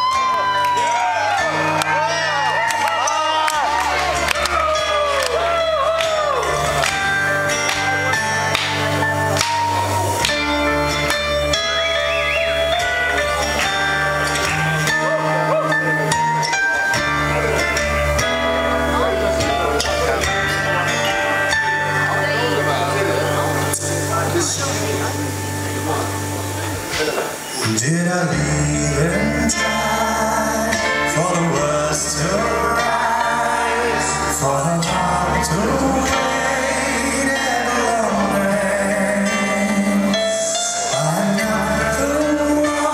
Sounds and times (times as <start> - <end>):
Music: 0.0 - 42.9
Speech: 18.9 - 28.2.